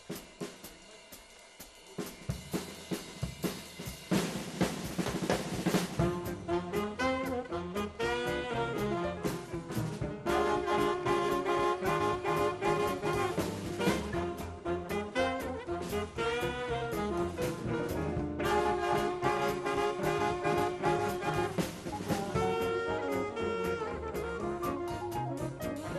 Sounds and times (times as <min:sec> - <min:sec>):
Jazz: 0:00.0 - 0:25.9.